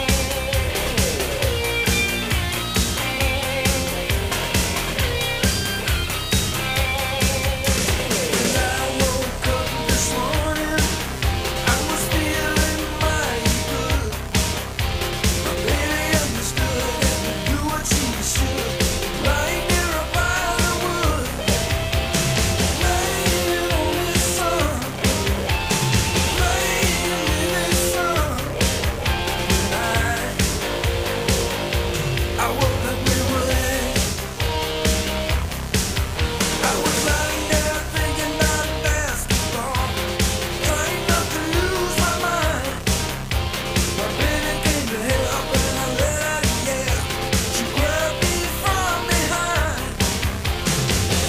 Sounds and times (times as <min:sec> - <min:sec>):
Music: 0:00.0 - 0:51.2.